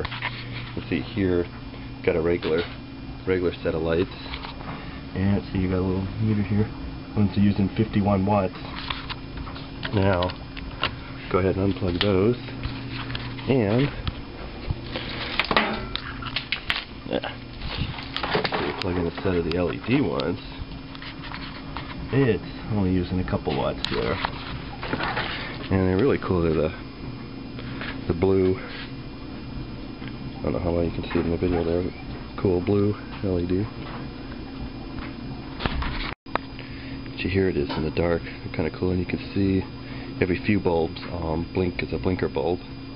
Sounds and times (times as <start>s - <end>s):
Speech: 0.8s - 4.4s, 5.2s - 8.6s, 9.9s - 10.4s, 11.3s - 12.5s, 13.5s - 14.0s, 17.1s - 17.4s, 18.7s - 20.6s, 22.1s - 24.2s, 25.7s - 26.8s, 28.1s - 28.7s, 30.4s - 33.7s, 37.2s - 42.6s.